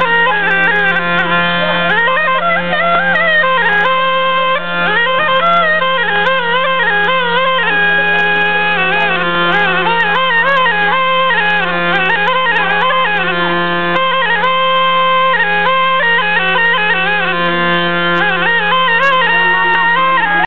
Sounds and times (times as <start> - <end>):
Music: 0.0 - 20.4
Speech: 1.4 - 2.2, 7.1 - 10.8, 18.9 - 20.4.